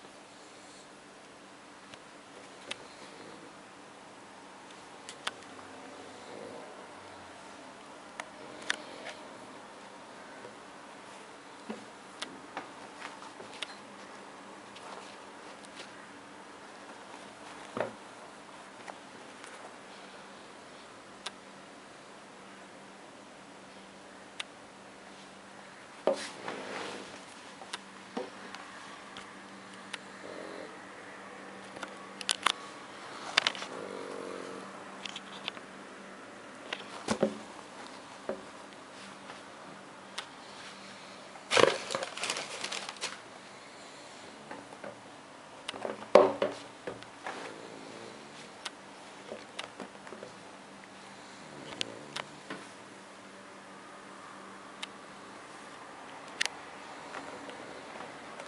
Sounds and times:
Inside, small room: 0:00.0 - 0:58.4.

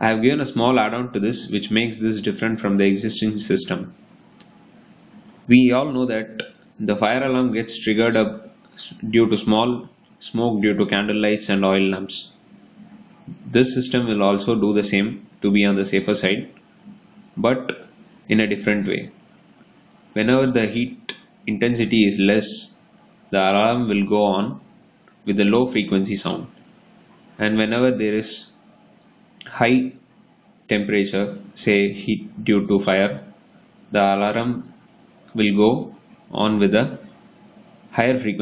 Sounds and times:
Speech: 0:00.0 - 0:04.0, 0:05.5 - 0:16.6, 0:17.4 - 0:19.2, 0:20.2 - 0:26.6, 0:27.4 - 0:28.6, 0:29.4 - 0:30.0, 0:30.7 - 0:33.3, 0:33.9 - 0:34.7, 0:35.3 - 0:37.1, 0:37.9 - 0:38.4.

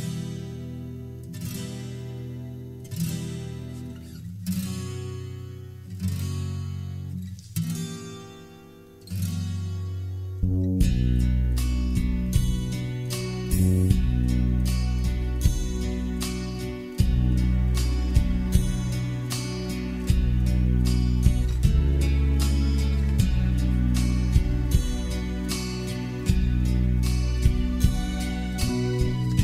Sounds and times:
Strum: 0:00.0 - 0:29.4.

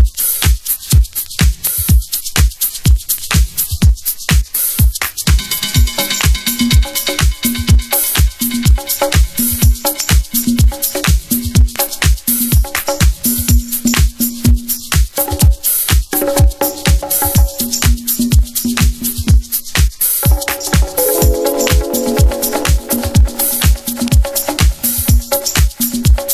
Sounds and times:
Music: 0:00.0 - 0:26.3.

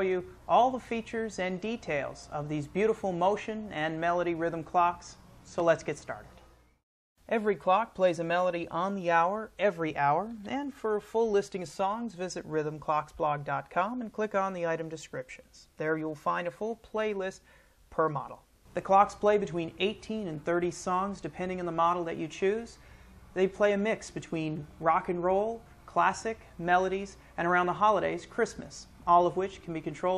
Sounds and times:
Speech: 0:00.0 - 0:06.4, 0:07.3 - 0:22.8, 0:23.4 - 0:30.1.

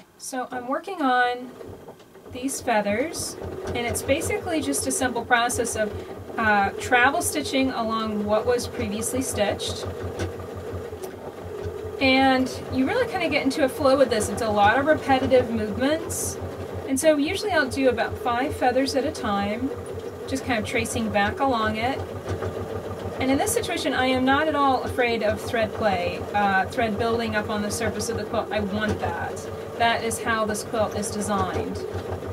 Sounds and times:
Sewing machine: 0:01.0 - 0:32.3.

